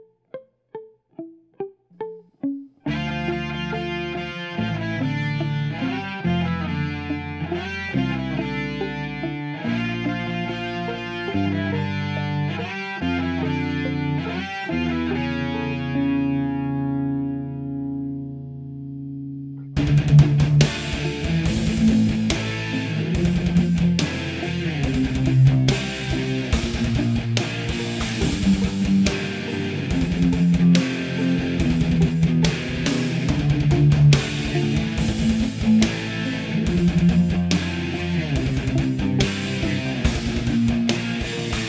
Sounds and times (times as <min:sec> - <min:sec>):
Electric guitar: 0:00.0 - 0:41.6.